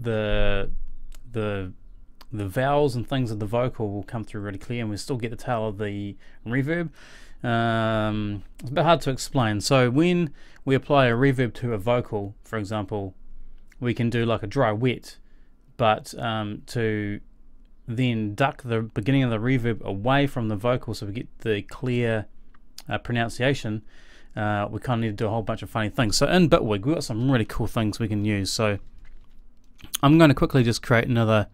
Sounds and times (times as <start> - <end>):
Speech: 0.0 - 13.2, 13.8 - 15.2, 15.8 - 17.2, 17.9 - 28.9, 29.9 - 31.5.